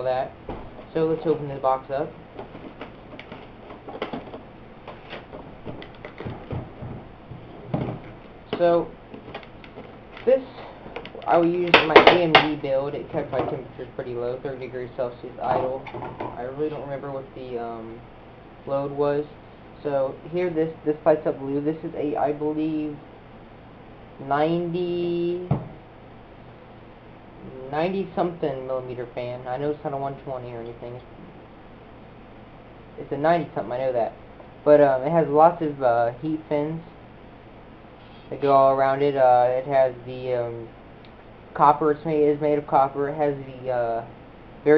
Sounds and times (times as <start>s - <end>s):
Speech: 0.0s - 2.2s, 8.5s - 9.0s, 10.2s - 18.0s, 18.7s - 23.0s, 24.2s - 25.6s, 27.4s - 31.1s, 33.0s - 36.9s, 38.3s - 40.7s, 41.6s - 44.7s
Inside, small room: 0.0s - 44.7s.